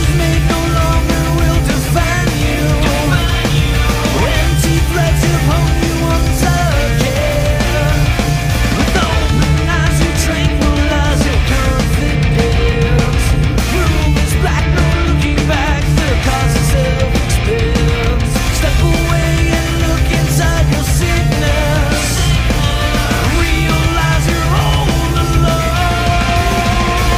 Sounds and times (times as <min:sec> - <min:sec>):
Happy music: 0:00.0 - 0:27.1.